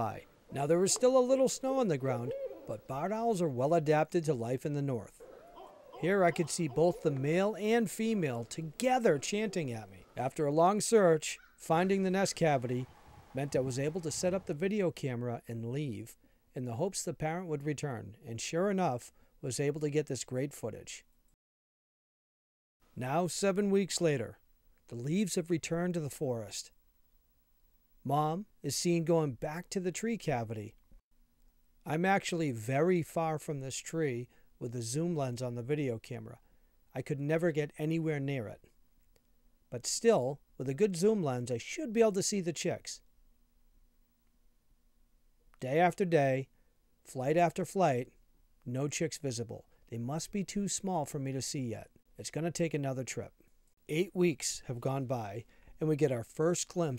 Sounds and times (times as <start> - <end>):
Speech: 0.0 - 5.2, 6.0 - 21.1, 23.0 - 26.7, 28.1 - 30.8, 31.9 - 36.4, 37.0 - 38.6, 39.8 - 43.0, 45.6 - 46.5, 47.1 - 48.1, 48.7 - 56.9.